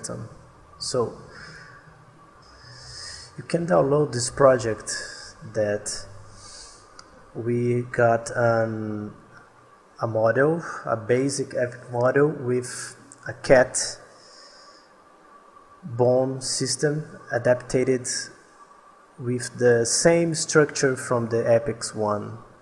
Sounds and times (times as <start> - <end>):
Speech: 0.0 - 1.3, 3.2 - 6.1, 7.4 - 9.3, 10.0 - 14.1, 15.8 - 18.4, 19.2 - 22.5.